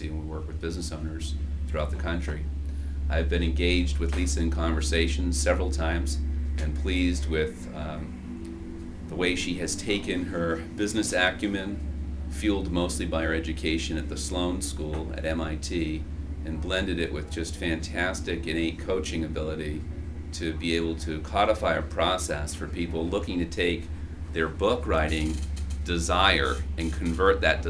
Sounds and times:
Speech: 0.0 - 2.5, 3.1 - 8.1, 9.1 - 19.8, 20.4 - 27.7.

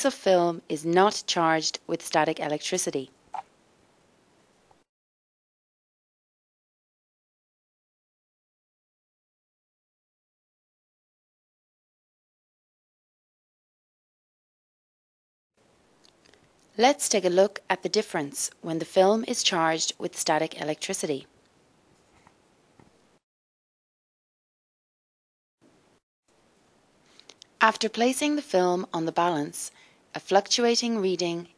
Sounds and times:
Speech: 0.0 - 3.1, 16.8 - 21.3, 27.6 - 31.5.

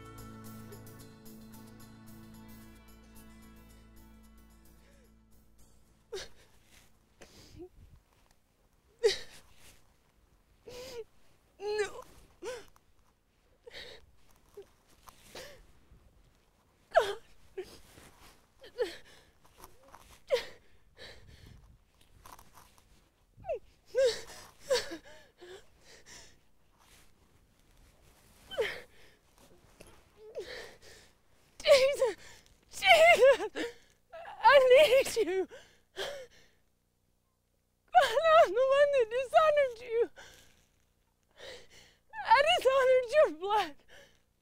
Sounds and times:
Speech: 31.6 - 32.2, 32.8 - 33.4, 34.2 - 35.5, 38.0 - 40.2, 42.2 - 43.8.

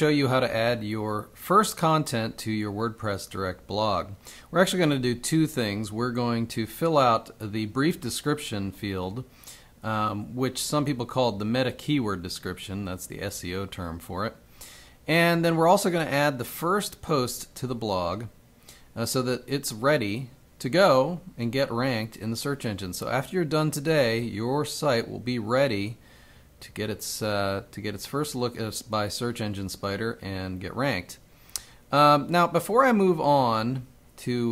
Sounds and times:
Speech: 0.0 - 14.4, 15.1 - 18.4, 19.0 - 26.0, 26.6 - 31.2, 31.9 - 34.5.

